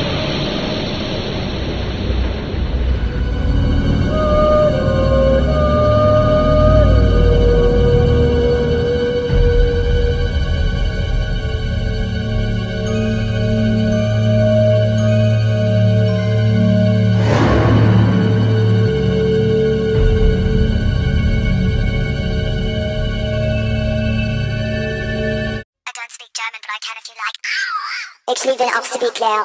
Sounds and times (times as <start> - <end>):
Scary music: 0.0 - 25.6
Speech: 25.9 - 29.4.